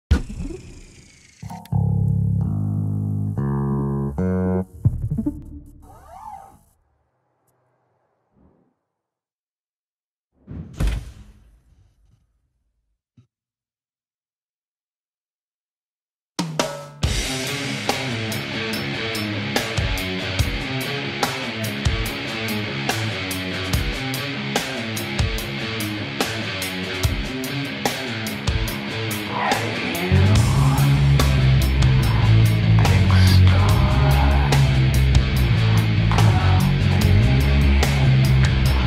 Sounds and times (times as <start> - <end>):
Guitar: 1.4 - 6.0, 17.1 - 38.8.